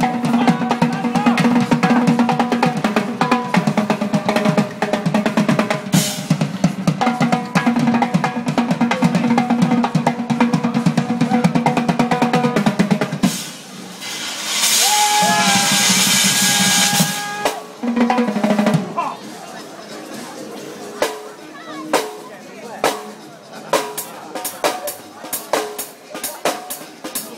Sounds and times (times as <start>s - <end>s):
Percussion: 0.0s - 27.3s
Speech: 0.1s - 2.0s, 18.9s - 27.3s.